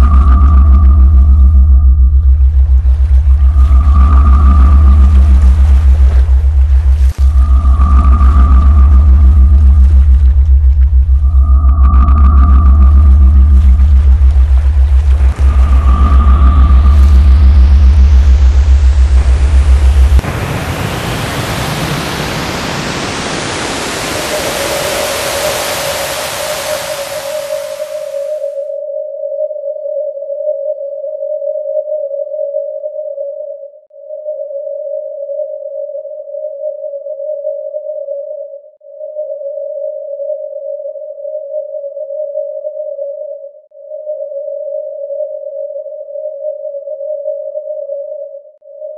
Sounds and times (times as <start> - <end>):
Pink noise: 0.0 - 28.7.